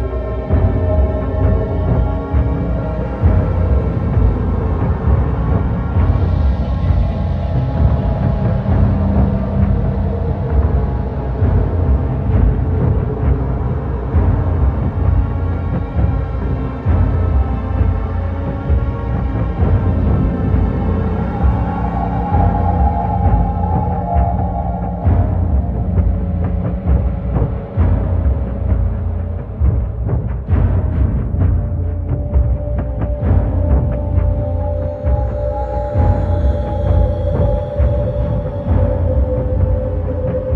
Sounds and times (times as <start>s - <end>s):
Scary music: 0.0s - 40.5s.